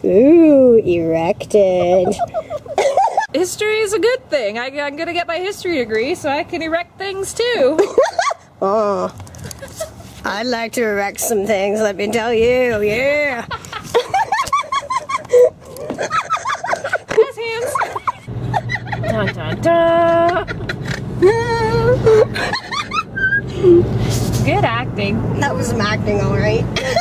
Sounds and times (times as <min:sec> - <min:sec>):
Car: 0:18.0 - 0:27.0.